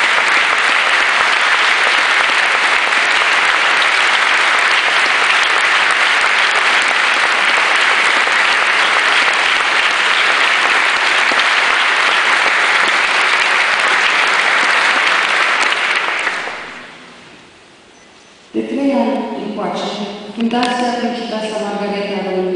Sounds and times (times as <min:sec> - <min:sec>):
Female speech, woman speaking: 0:18.6 - 0:22.5.